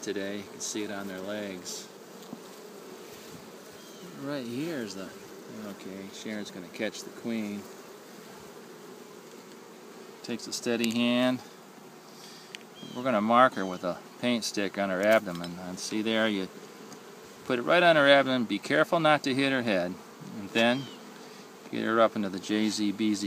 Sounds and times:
Bee, wasp, etc.: 0.0 - 23.2
Fly, housefly: 0.0 - 23.2.

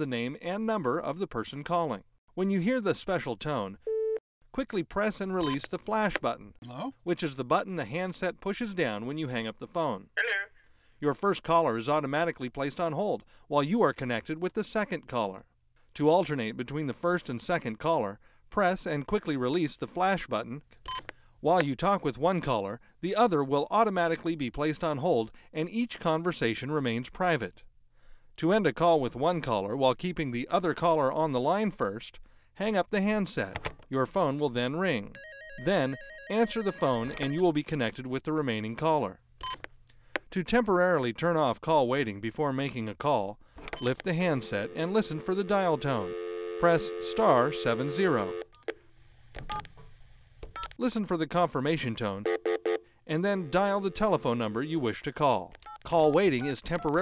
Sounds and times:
Speech: 0.0 - 3.8, 4.6 - 20.6, 21.4 - 27.6, 28.4 - 39.2, 40.3 - 48.4, 50.8 - 52.3, 53.1 - 57.0.

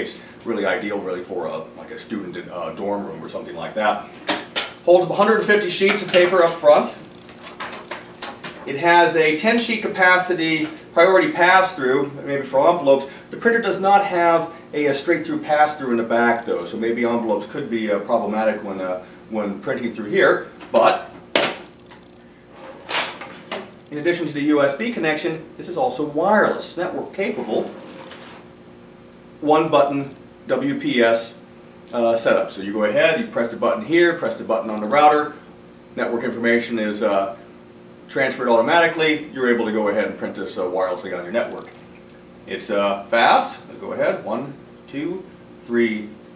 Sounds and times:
Speech: 0.0 - 4.1, 4.8 - 7.0, 8.7 - 21.1, 23.9 - 27.8, 29.4 - 35.4, 36.0 - 37.4, 38.1 - 41.8, 42.5 - 46.2.

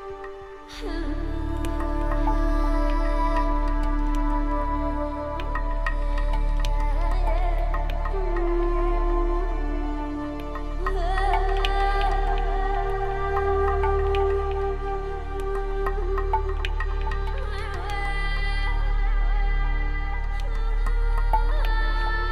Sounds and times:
Music: 0.0 - 22.3.

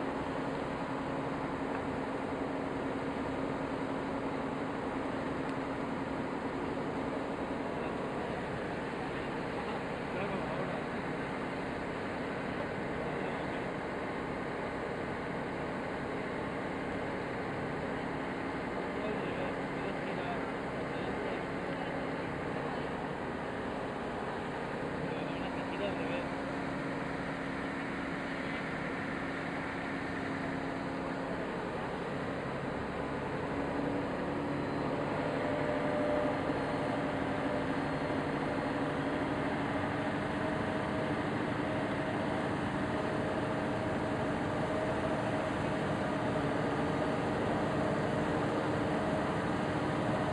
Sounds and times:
Motorboat, speedboat: 0.0 - 50.3
Speech: 7.8 - 10.9, 19.0 - 23.0, 25.0 - 26.3.

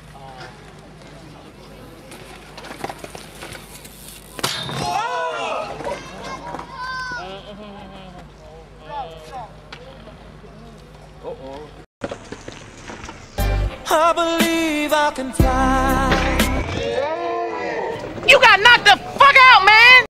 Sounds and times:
Music: 13.4 - 16.9.

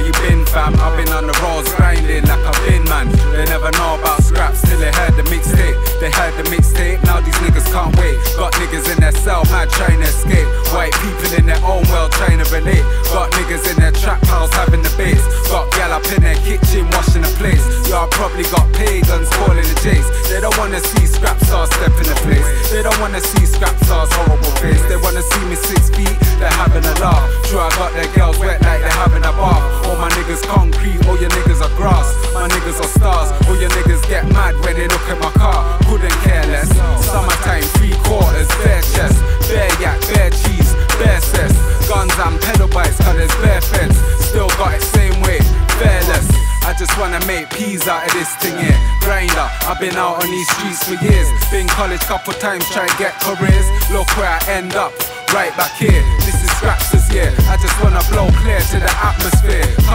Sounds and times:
Music: 0.0 - 59.9.

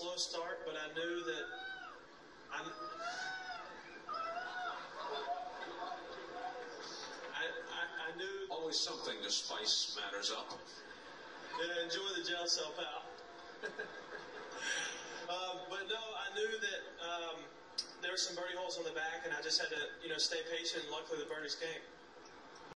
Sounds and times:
Speech: 0.0 - 1.5, 2.5 - 3.1, 5.7 - 10.7, 11.5 - 13.1, 15.3 - 21.9.

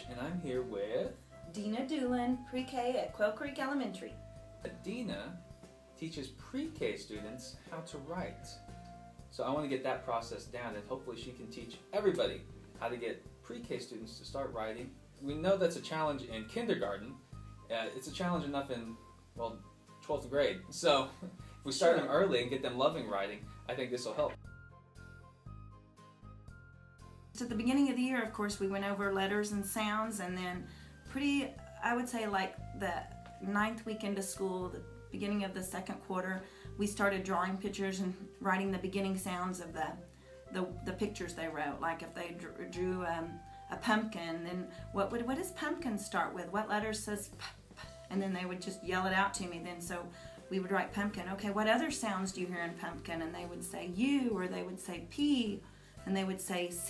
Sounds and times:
Music: 0.0 - 56.8
Speech: 21.7 - 24.4, 31.2 - 56.8.

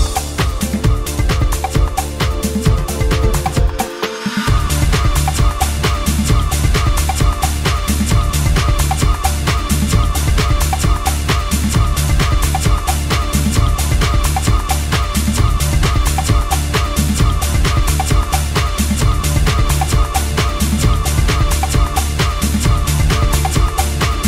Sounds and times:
Disco: 0.0 - 24.2.

